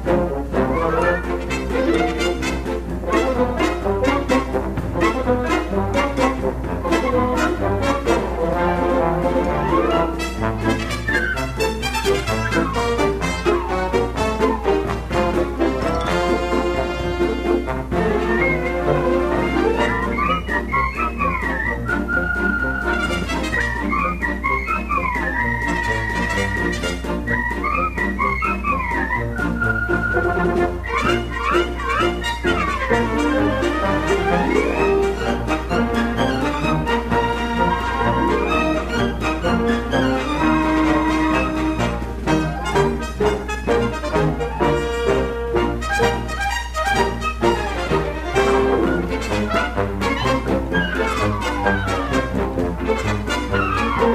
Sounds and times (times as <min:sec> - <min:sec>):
Brass instrument: 0:00.0 - 0:54.1.